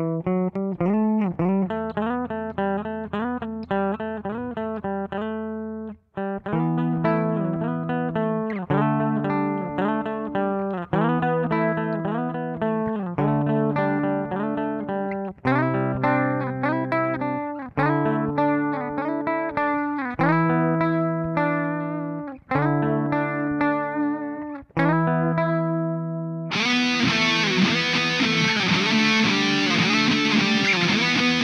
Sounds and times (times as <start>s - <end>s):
Guitar: 0.0s - 31.4s.